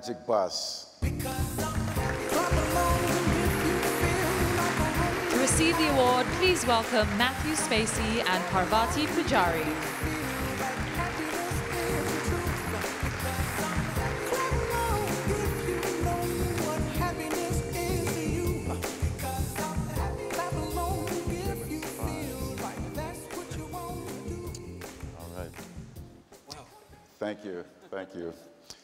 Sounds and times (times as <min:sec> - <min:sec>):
Male speech, man speaking: 0:00.0 - 0:00.9, 0:25.2 - 0:25.6, 0:26.5 - 0:28.6
Conversation: 0:00.0 - 0:01.0, 0:05.4 - 0:12.7, 0:21.6 - 0:28.8
Music: 0:01.0 - 0:27.6.